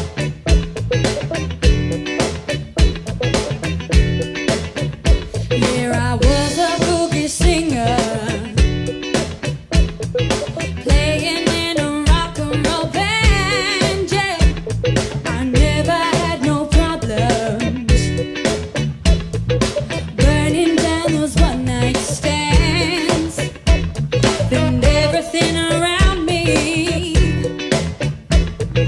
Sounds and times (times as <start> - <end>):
Happy music: 0.0 - 28.8
Jazz: 0.0 - 28.8.